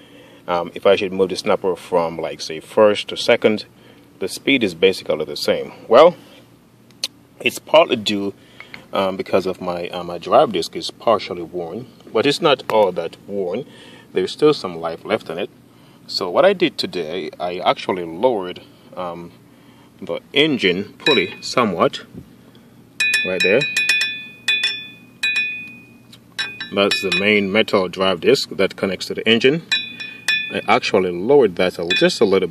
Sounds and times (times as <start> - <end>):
Speech: 0.5 - 6.2, 7.4 - 15.5, 16.1 - 19.4, 20.0 - 22.1, 23.2 - 23.7, 26.7 - 29.7, 30.5 - 32.5.